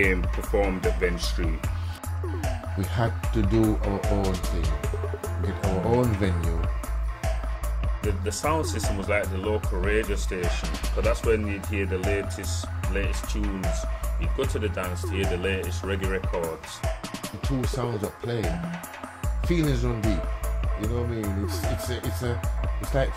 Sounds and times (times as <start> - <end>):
Speech: 0.0 - 1.6, 2.8 - 4.8, 5.4 - 6.6, 8.0 - 18.7, 19.5 - 20.2, 20.8 - 23.1
Music: 0.0 - 23.1.